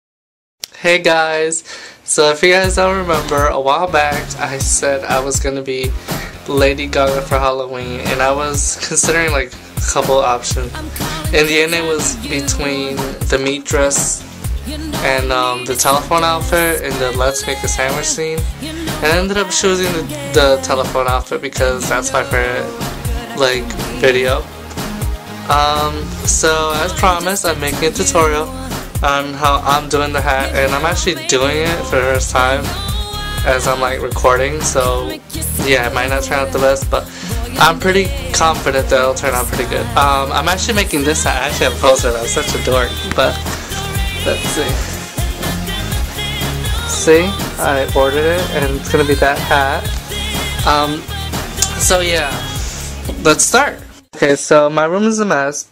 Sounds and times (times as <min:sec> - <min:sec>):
Speech: 0:00.7 - 0:14.2, 0:14.9 - 0:24.5, 0:25.5 - 0:32.8, 0:33.4 - 0:43.4, 0:44.2 - 0:44.9, 0:46.8 - 0:49.9, 0:50.6 - 0:52.5, 0:53.1 - 0:55.7
Music: 0:01.0 - 0:54.9.